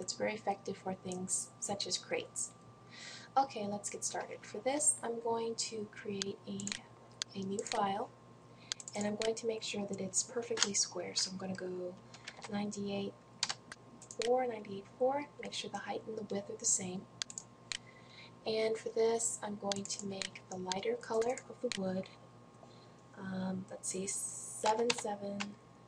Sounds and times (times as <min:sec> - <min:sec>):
Speech: 0:00.0 - 0:02.5, 0:03.4 - 0:08.1, 0:08.9 - 0:13.2, 0:14.2 - 0:17.1, 0:18.4 - 0:22.1, 0:23.2 - 0:25.6.